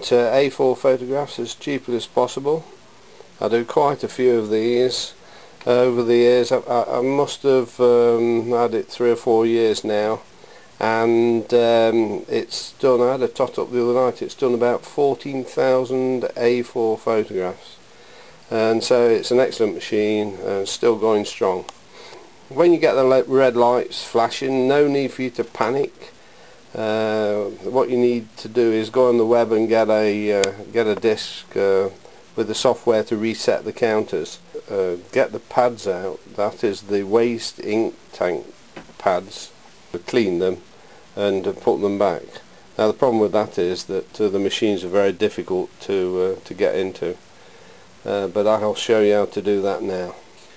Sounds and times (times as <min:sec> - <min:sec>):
Speech: 0:00.0 - 0:02.7, 0:03.4 - 0:10.2, 0:10.8 - 0:17.8, 0:18.5 - 0:21.7, 0:22.5 - 0:40.6, 0:41.2 - 0:47.2, 0:48.0 - 0:50.2.